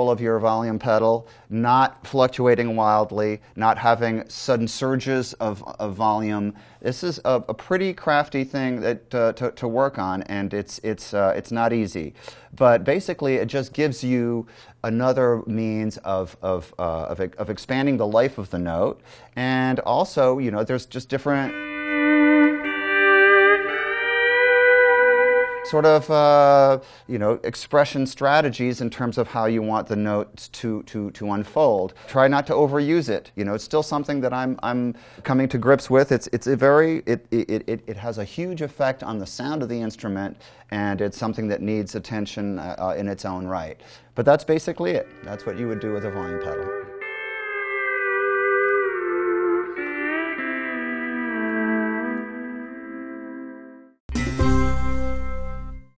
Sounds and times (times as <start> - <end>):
Steel guitar, slide guitar: 21.5 - 26.0, 45.0 - 52.8.